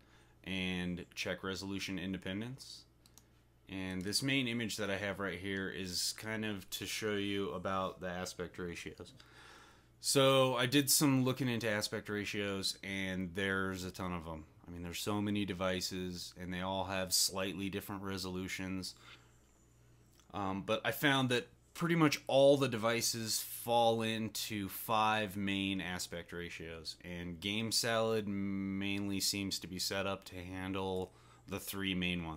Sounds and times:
Speech: 0:00.5 - 0:02.9, 0:03.7 - 0:09.2, 0:10.0 - 0:19.0, 0:20.3 - 0:32.3.

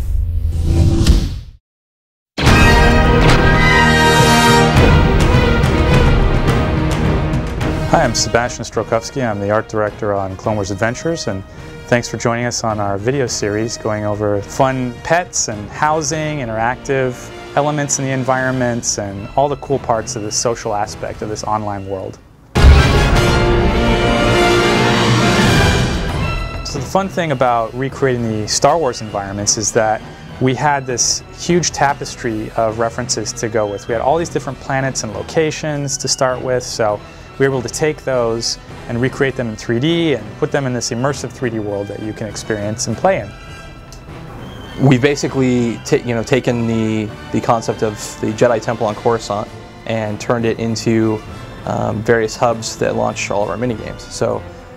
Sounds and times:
Music: 0:02.4 - 0:54.7
Speech: 0:07.9 - 0:22.2, 0:26.7 - 0:43.4, 0:44.8 - 0:54.4.

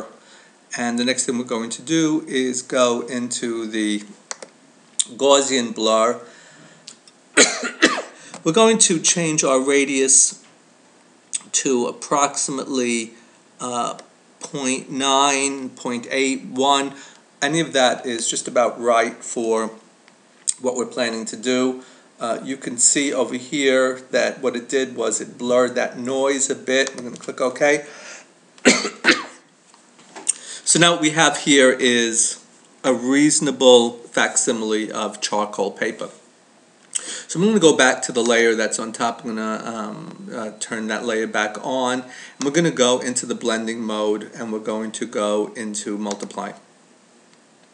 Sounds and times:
Speech: 0:00.0 - 0:04.2, 0:05.0 - 0:06.3, 0:08.4 - 0:10.5, 0:11.4 - 0:19.9, 0:20.5 - 0:27.9, 0:30.6 - 0:36.3, 0:37.2 - 0:46.7
Throat clearing: 0:07.4 - 0:08.2, 0:28.6 - 0:29.4.

